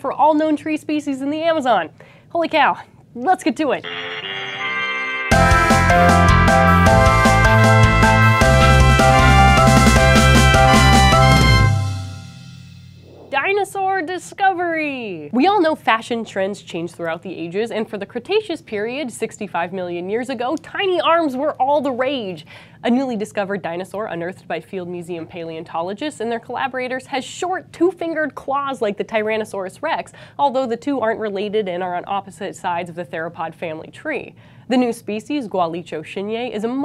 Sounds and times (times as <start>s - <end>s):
Speech: 0.0s - 3.8s, 13.3s - 36.8s.